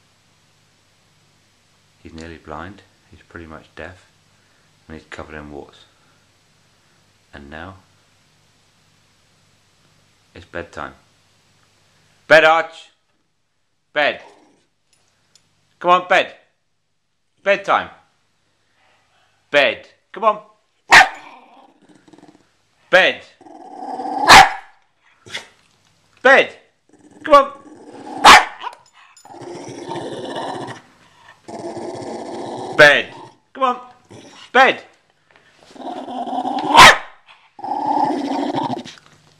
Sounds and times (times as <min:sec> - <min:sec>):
Speech: 0:02.0 - 0:04.1, 0:04.9 - 0:05.9, 0:07.3 - 0:07.9, 0:10.3 - 0:11.1, 0:12.3 - 0:13.0, 0:14.0 - 0:14.3, 0:15.8 - 0:16.5, 0:17.4 - 0:18.1, 0:19.5 - 0:20.5, 0:22.9 - 0:23.4, 0:26.2 - 0:27.6, 0:32.8 - 0:34.9
Growling: 0:14.2 - 0:14.7, 0:21.2 - 0:22.5, 0:23.4 - 0:24.4, 0:26.9 - 0:28.4, 0:29.2 - 0:34.6, 0:35.6 - 0:36.9, 0:37.6 - 0:39.2
Bow-wow: 0:20.9 - 0:21.4, 0:24.1 - 0:25.5, 0:28.0 - 0:28.8, 0:36.6 - 0:37.2.